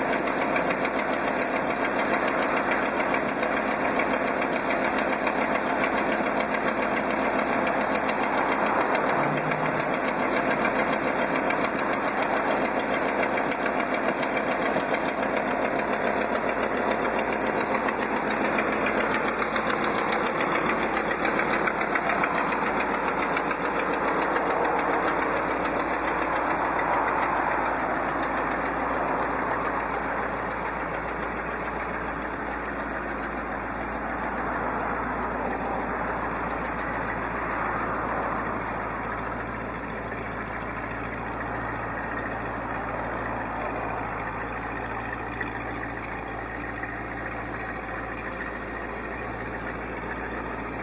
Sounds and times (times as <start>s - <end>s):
Engine: 0.0s - 50.8s
Motor vehicle (road): 0.0s - 50.8s.